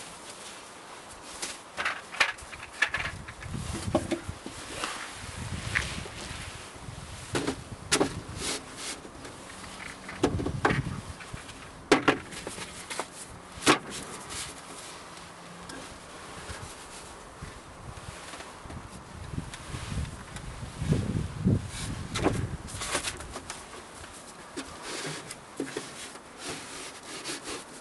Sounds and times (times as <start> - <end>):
Rustling leaves: 0.0 - 27.8
Wind noise (microphone): 2.4 - 8.5, 10.2 - 11.6, 17.4 - 23.5.